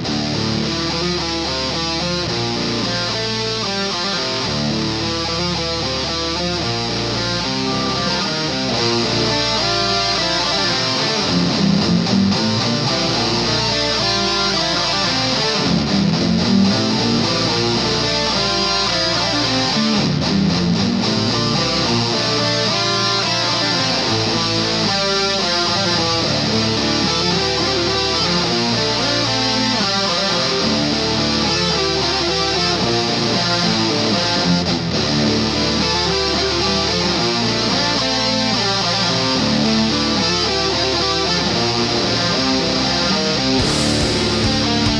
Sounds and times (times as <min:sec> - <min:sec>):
Electric guitar: 0:00.0 - 0:44.9.